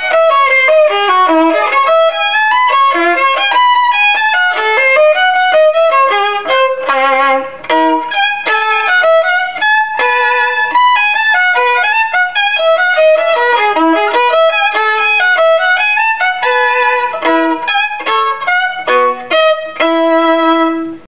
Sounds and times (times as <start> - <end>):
Violin, fiddle: 0.0 - 21.0.